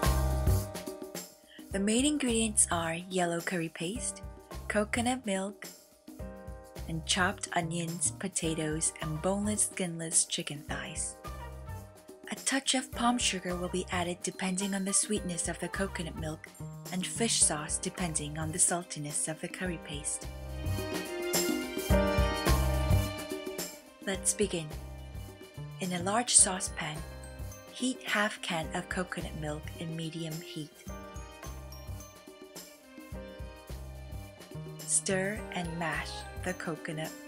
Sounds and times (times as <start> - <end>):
Music: 0.0 - 37.2
Speech: 1.6 - 5.7, 6.9 - 11.2, 12.3 - 20.2, 24.1 - 24.8, 25.8 - 27.1, 27.8 - 30.8, 34.9 - 37.2.